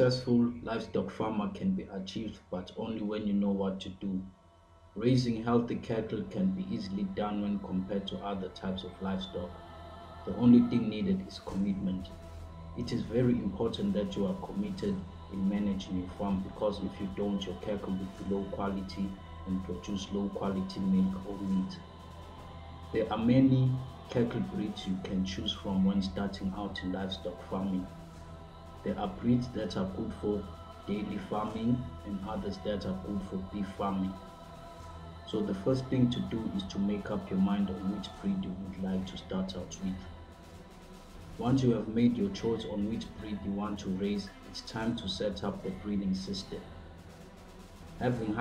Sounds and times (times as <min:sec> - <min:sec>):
Speech: 0:00.0 - 0:04.3, 0:05.0 - 0:09.6, 0:10.3 - 0:12.2, 0:12.8 - 0:21.8, 0:22.9 - 0:27.9, 0:28.8 - 0:34.3, 0:35.2 - 0:40.1, 0:41.4 - 0:46.8, 0:48.0 - 0:48.4
Music: 0:00.0 - 0:48.4.